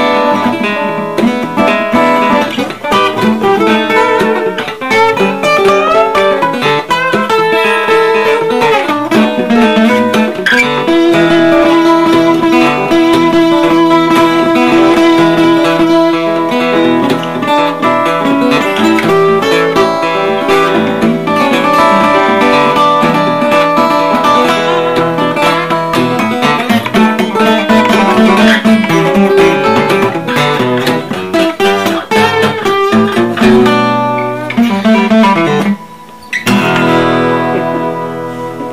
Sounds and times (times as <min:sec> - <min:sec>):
Acoustic guitar: 0:00.0 - 0:38.7
Blues: 0:00.0 - 0:38.7.